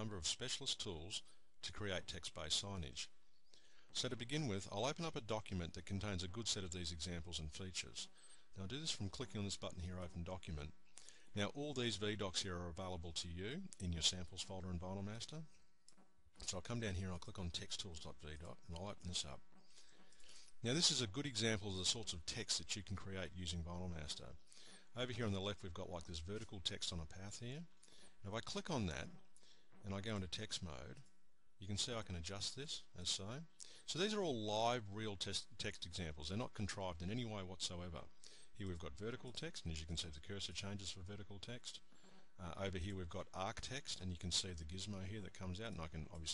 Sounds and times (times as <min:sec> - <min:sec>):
Speech: 0:00.0 - 0:03.2, 0:03.9 - 0:15.6, 0:16.4 - 0:19.5, 0:20.5 - 0:29.2, 0:29.8 - 0:46.3.